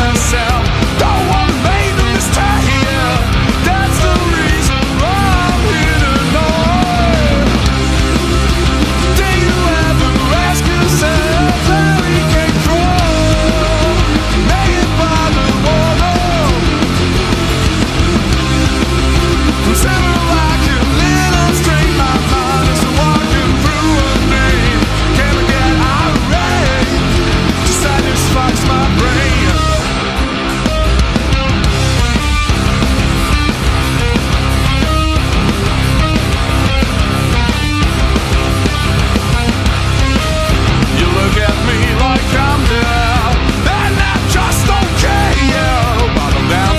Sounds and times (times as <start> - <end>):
Rhythm and blues: 0.0 - 46.7.